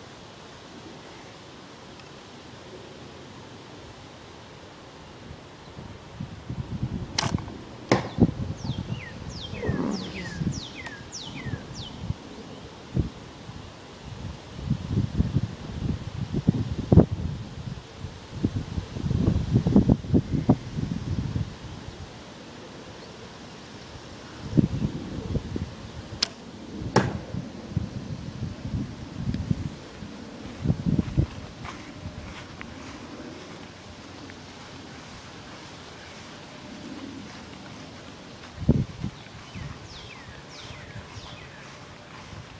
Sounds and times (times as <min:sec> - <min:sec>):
Arrow: 0:07.2 - 0:08.2, 0:26.2 - 0:27.3.